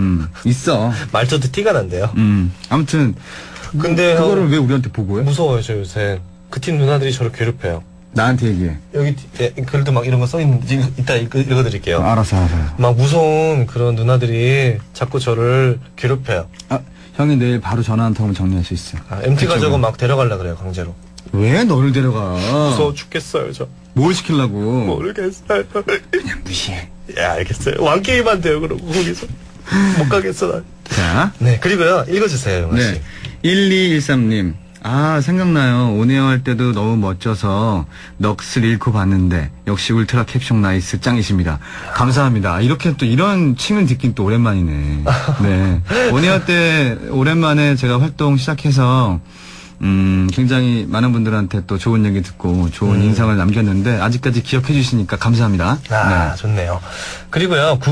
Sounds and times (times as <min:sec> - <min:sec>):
Speech: 0:00.0 - 0:25.4, 0:26.2 - 0:29.3, 0:30.0 - 0:49.2, 0:49.8 - 0:57.9.